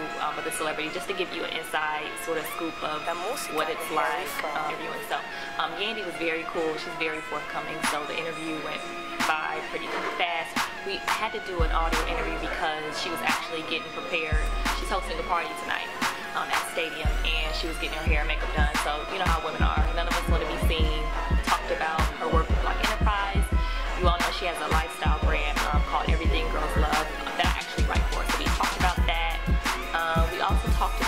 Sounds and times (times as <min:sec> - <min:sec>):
Music: 0:00.0 - 0:31.0
Speech: 0:00.0 - 0:31.0.